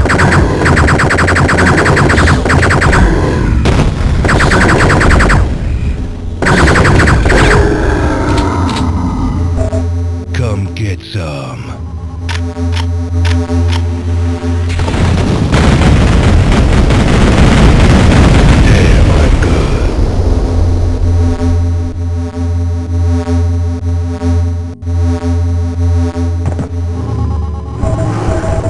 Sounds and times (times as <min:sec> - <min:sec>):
Speech: 0:10.3 - 0:11.8, 0:18.6 - 0:19.9.